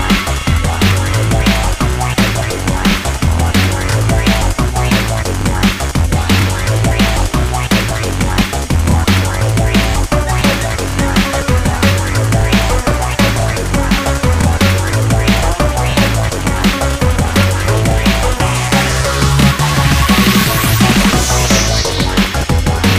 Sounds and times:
Drum and bass: 0.0s - 22.9s.

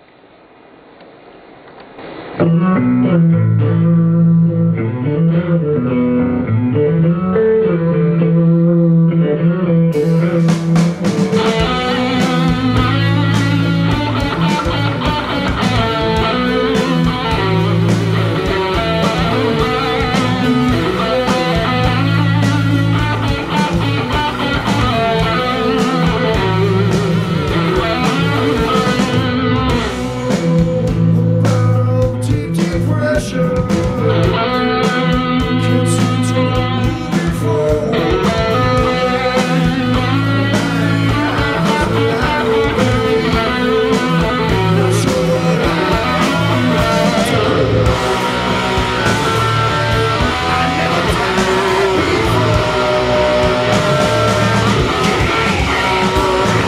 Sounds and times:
Electric guitar: 0.0s - 56.6s.

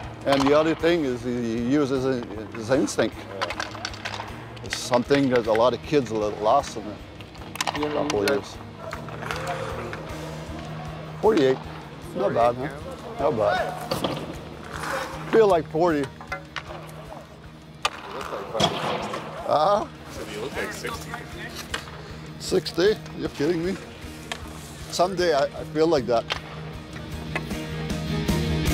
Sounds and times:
Music: 0.0s - 28.7s.

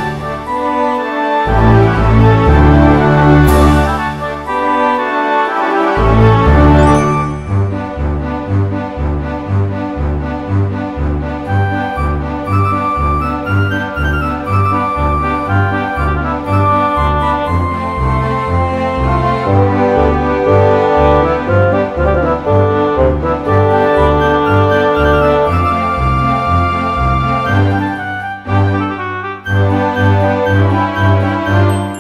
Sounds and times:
Background music: 0.0s - 32.0s
Happy music: 0.0s - 32.0s
Video game music: 0.0s - 32.0s.

